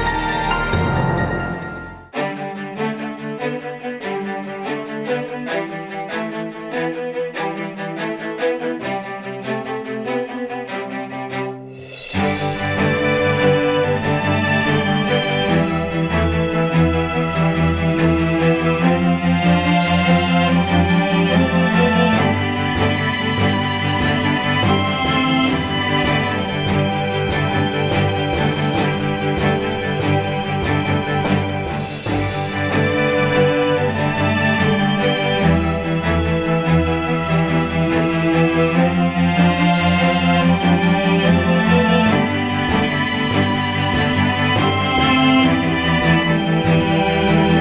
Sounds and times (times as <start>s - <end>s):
Music: 0.0s - 47.6s.